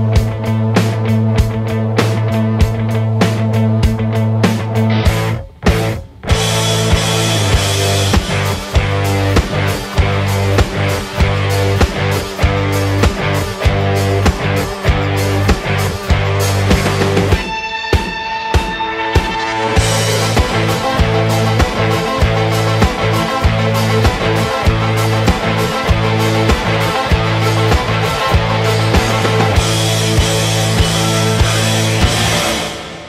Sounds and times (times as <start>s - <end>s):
Music: 0.0s - 33.0s.